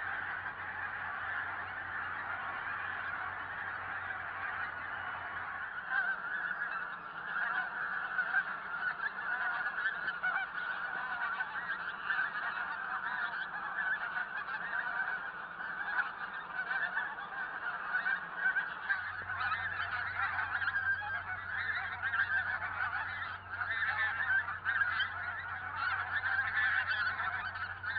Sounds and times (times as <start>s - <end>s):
Honk: 0.0s - 27.9s.